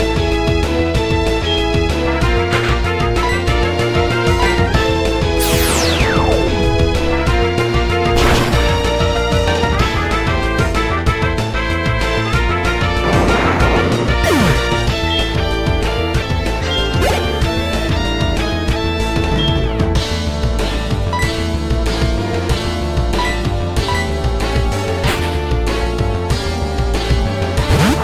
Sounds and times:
Music: 0.0 - 28.0.

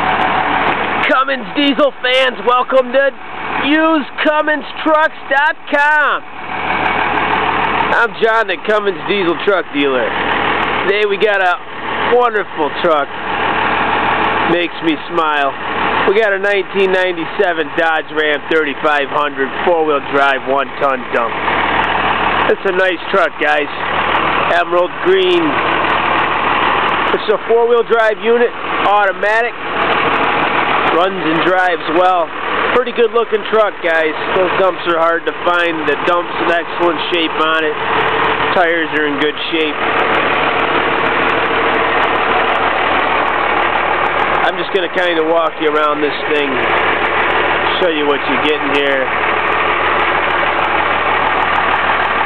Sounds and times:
Truck: 0.0 - 52.2
Speech: 1.0 - 6.2, 7.9 - 10.2, 10.8 - 13.1, 14.4 - 21.4, 22.4 - 23.9, 24.5 - 25.6, 27.1 - 29.6, 30.9 - 37.8, 38.5 - 39.8, 44.4 - 46.7, 47.6 - 49.2.

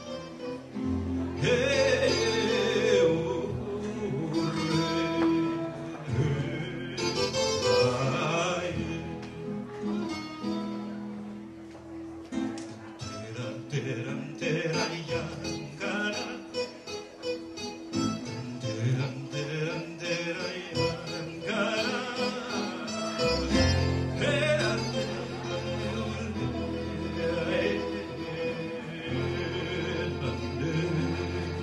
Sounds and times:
Guitar: 0.0 - 31.6.

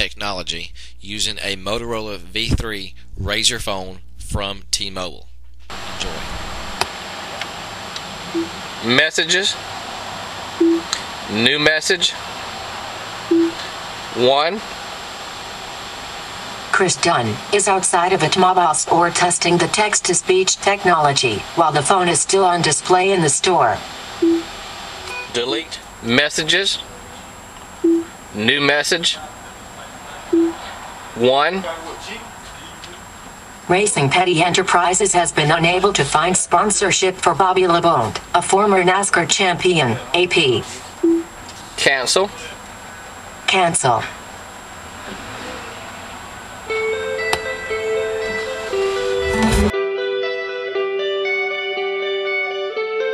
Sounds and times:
Male speech, man speaking: 0.0 - 6.4, 8.8 - 9.6, 11.3 - 12.2, 14.2 - 14.6, 25.3 - 26.9, 28.4 - 33.0, 39.6 - 40.8, 41.8 - 42.6
Female speech, woman speaking: 16.7 - 23.8, 33.7 - 40.8, 43.5 - 44.2.

